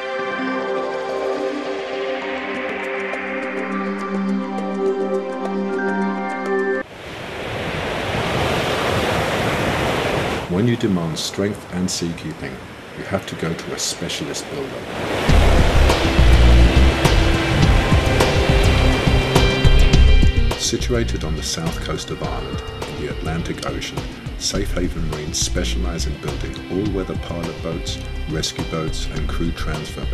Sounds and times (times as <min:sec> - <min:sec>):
Music: 0:00.0 - 0:06.8, 0:15.3 - 0:30.1
Outside, rural or natural: 0:05.7 - 0:30.1
Waves, surf: 0:06.8 - 0:24.5
Speech: 0:10.5 - 0:14.9, 0:20.6 - 0:30.1.